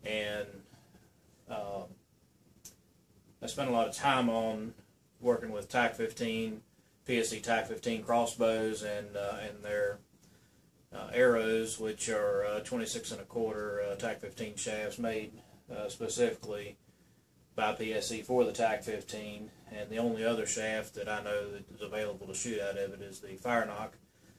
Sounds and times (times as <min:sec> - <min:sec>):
Speech: 0:00.0 - 0:00.7, 0:01.5 - 0:02.0, 0:03.4 - 0:10.0, 0:11.0 - 0:16.8, 0:17.6 - 0:24.0.